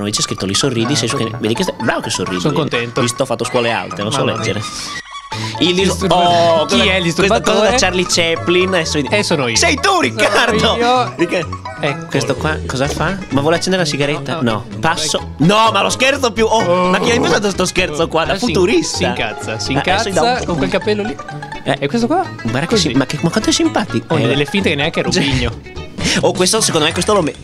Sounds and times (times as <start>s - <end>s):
Speech: 0.0s - 4.8s, 5.6s - 25.5s, 26.2s - 27.4s
Music: 0.0s - 27.4s.